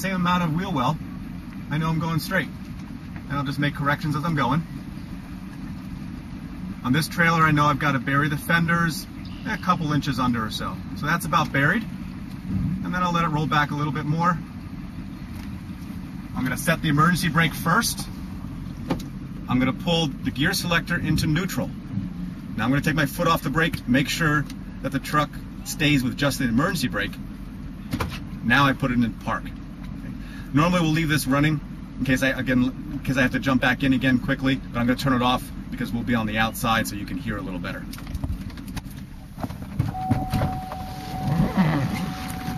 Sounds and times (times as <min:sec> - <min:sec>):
Speech: 0:00.0 - 0:01.0, 0:01.7 - 0:02.6, 0:03.3 - 0:04.7, 0:06.8 - 0:11.9, 0:12.8 - 0:14.4, 0:16.4 - 0:18.1, 0:19.5 - 0:21.8, 0:22.6 - 0:27.2, 0:28.4 - 0:29.6, 0:30.6 - 0:37.9
Outside, rural or natural: 0:00.0 - 0:42.5
Vehicle: 0:00.0 - 0:42.5.